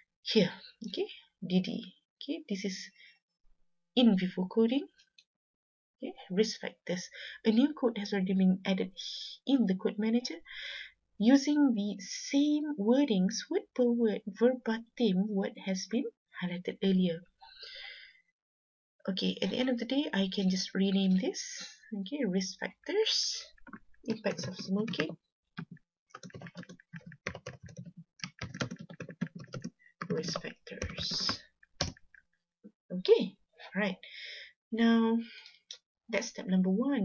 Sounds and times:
Narration, monologue: 0.0 - 5.3, 6.0 - 18.4, 19.1 - 37.0.

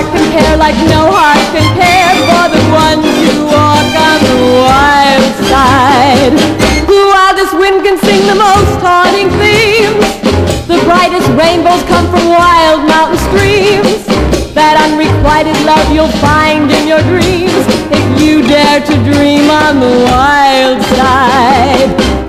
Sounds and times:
Music: 0.0 - 22.2.

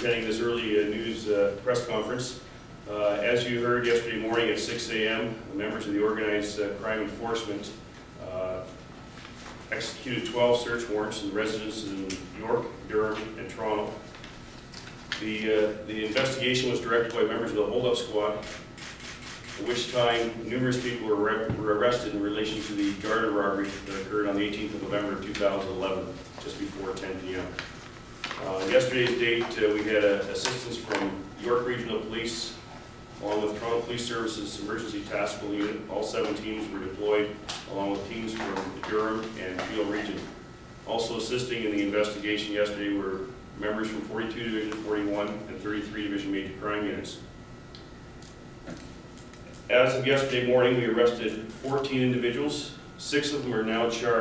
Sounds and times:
Speech: 0.0 - 8.8, 9.7 - 14.1, 15.2 - 18.6, 19.6 - 27.6, 28.4 - 32.6, 33.2 - 47.3, 49.7 - 54.2.

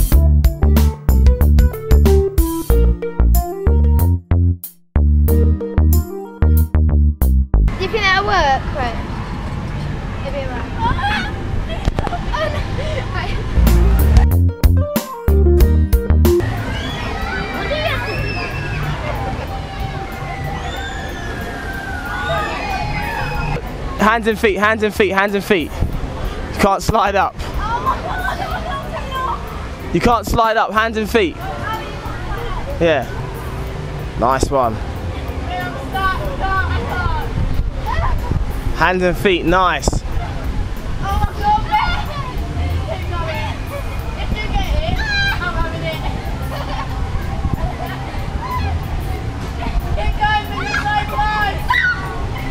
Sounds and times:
Outside, urban or manmade: 0.0 - 52.5.

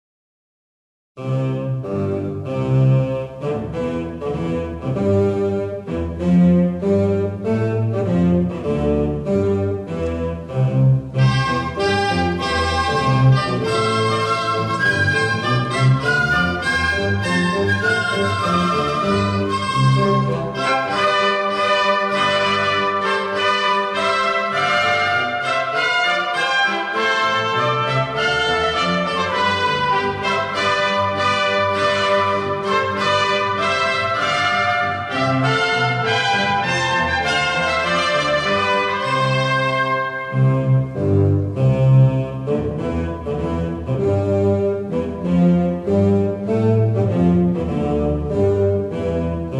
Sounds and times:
Classical music: 1.2 - 49.5.

